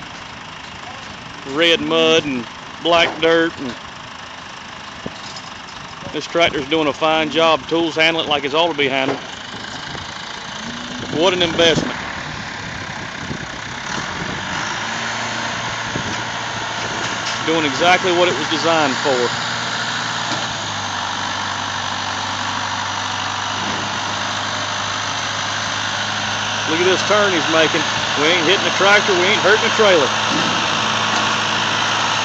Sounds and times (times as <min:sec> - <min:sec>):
Speech: 0:00.8 - 0:03.8, 0:06.0 - 0:09.2, 0:11.1 - 0:12.0, 0:17.4 - 0:19.3, 0:26.7 - 0:30.2.